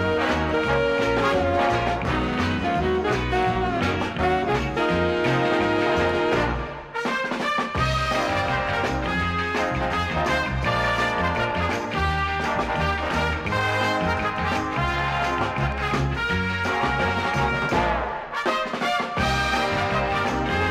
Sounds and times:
Soundtrack music: 0.0s - 7.1s, 7.7s - 20.7s
Theme music: 0.0s - 20.7s.

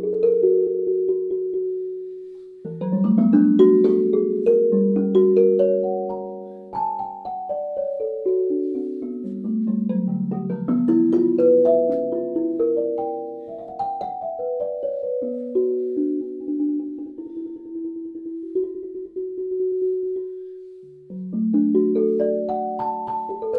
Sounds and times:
Music: 0.0s - 23.5s.

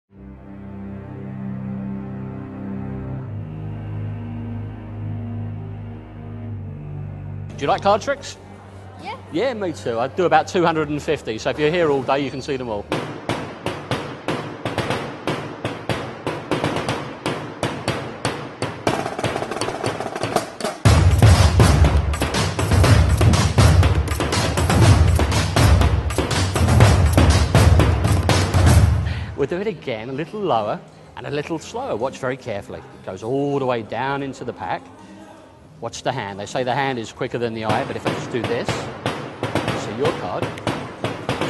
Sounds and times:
Scary music: 0.2s - 8.6s.

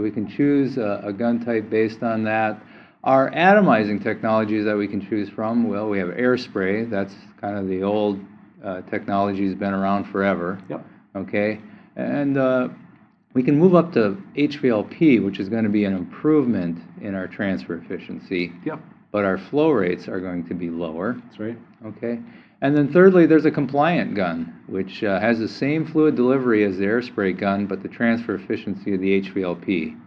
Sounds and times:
Speech: 0.0s - 12.8s, 13.4s - 30.0s.

